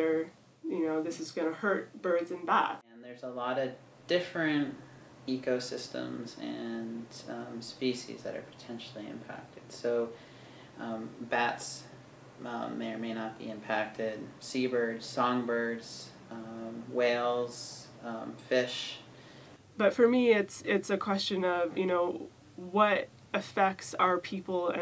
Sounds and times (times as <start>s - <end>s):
Speech: 0.0s - 10.2s, 10.8s - 19.1s, 19.8s - 24.8s.